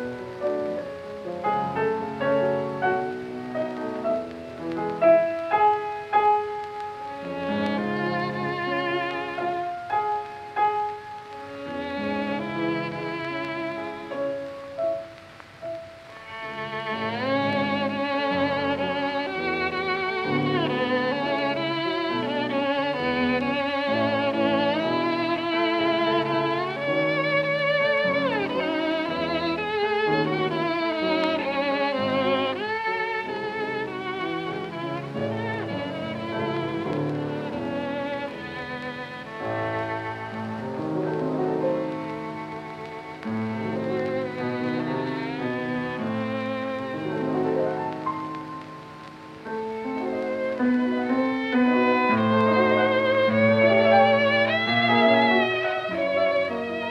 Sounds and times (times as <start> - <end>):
Pizzicato: 0.0 - 56.9.